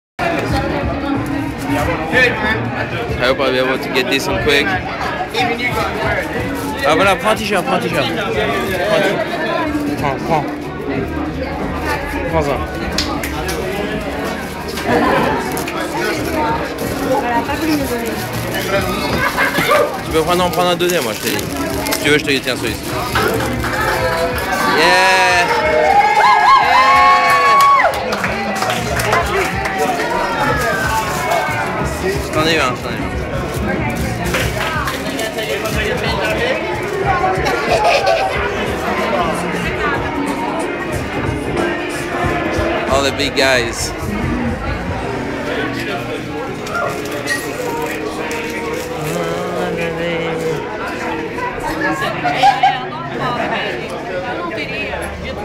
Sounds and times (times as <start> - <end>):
Music: 0.2 - 55.4.